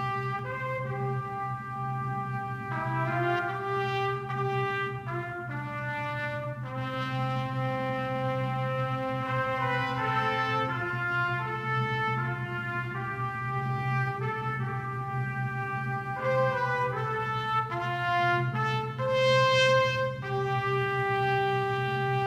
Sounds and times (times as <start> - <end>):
Trombone: 0.0 - 22.2.